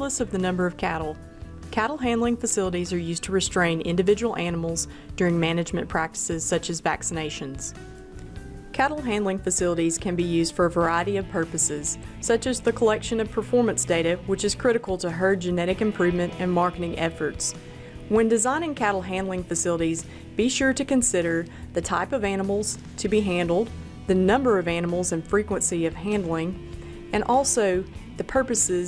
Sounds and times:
Speech: 0:00.0 - 0:01.2, 0:01.8 - 0:07.7, 0:08.8 - 0:17.5, 0:18.1 - 0:26.6, 0:27.2 - 0:28.8
Music: 0:00.0 - 0:28.8.

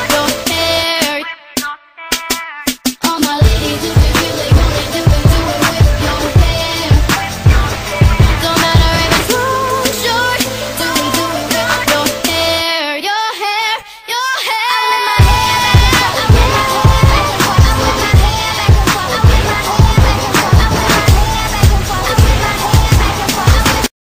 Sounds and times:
Music: 0:00.0 - 0:24.0.

